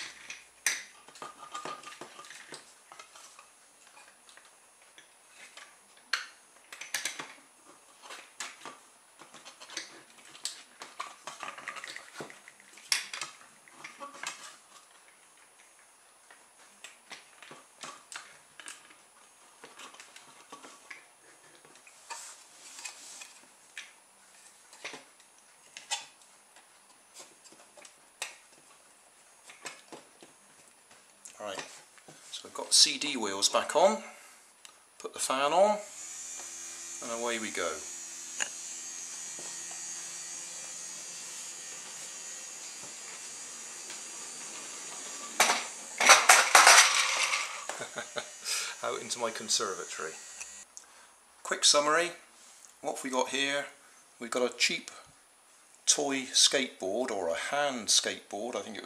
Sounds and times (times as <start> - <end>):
Inside, small room: 0.0 - 58.8
Speech: 31.4 - 31.7, 32.3 - 34.2, 35.0 - 35.9, 37.0 - 37.9, 48.8 - 50.2, 51.4 - 52.2, 52.8 - 55.1, 55.9 - 58.8.